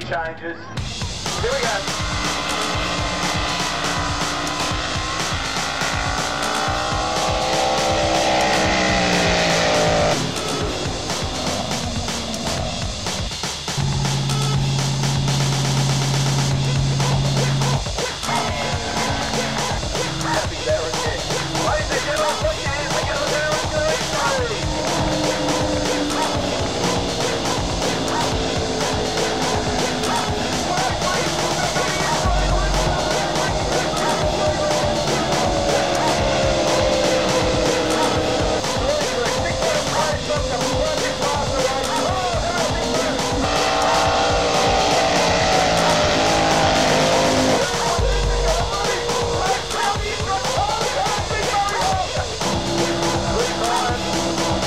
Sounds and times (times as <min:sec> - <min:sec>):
Music: 0:00.0 - 0:54.6.